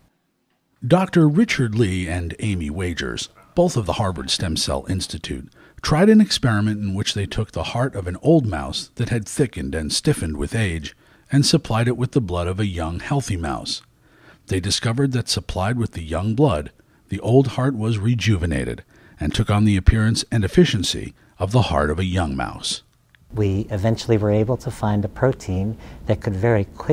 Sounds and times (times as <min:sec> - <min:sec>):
Speech: 0:00.8 - 0:13.9, 0:14.5 - 0:26.9.